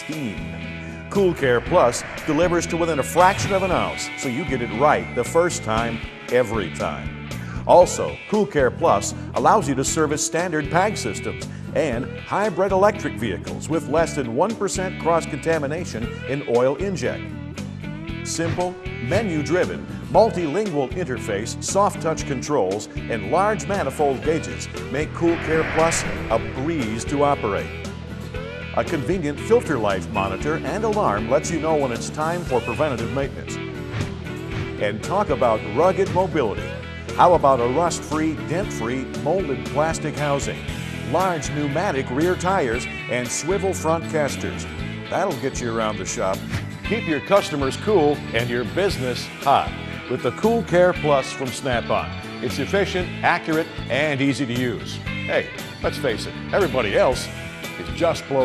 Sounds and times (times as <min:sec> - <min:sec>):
Speech: 0:00.0 - 0:00.5, 0:01.1 - 0:17.2, 0:18.2 - 0:27.8, 0:28.8 - 0:33.6, 0:34.8 - 0:58.4
Music: 0:00.0 - 0:58.4.